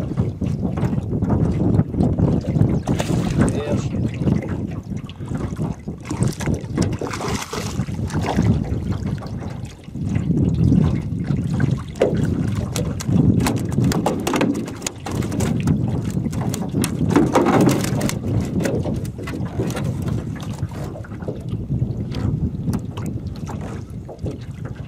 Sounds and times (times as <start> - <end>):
Rowboat, canoe, kayak: 0.0 - 24.8.